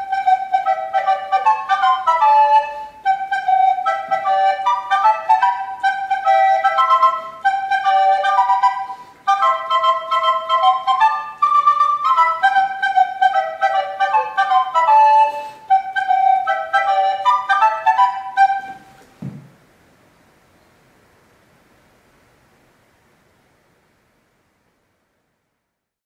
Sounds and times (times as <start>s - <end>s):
Music: 0.0s - 19.1s.